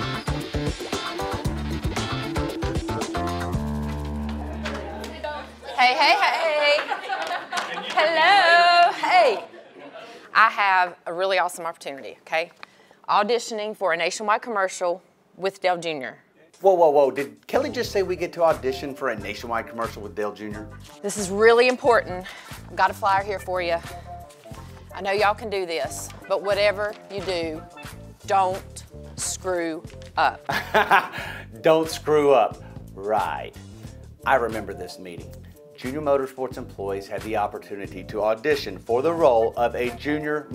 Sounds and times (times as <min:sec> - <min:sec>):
Music: 0:00.0 - 0:05.8, 0:17.2 - 0:40.5.